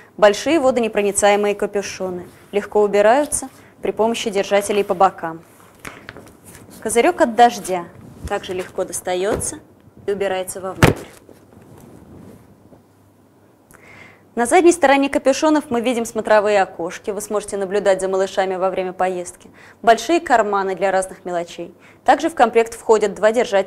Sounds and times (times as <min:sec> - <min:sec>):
Speech: 0:00.2 - 0:05.5, 0:06.8 - 0:10.8, 0:14.4 - 0:23.6.